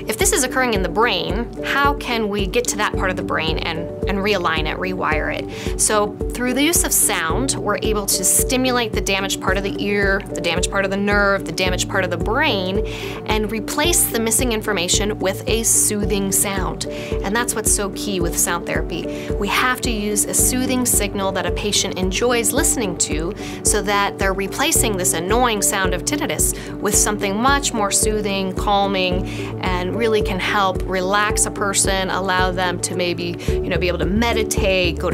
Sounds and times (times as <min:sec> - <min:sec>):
Music: 0:00.0 - 0:35.1
Speech: 0:00.1 - 0:35.1.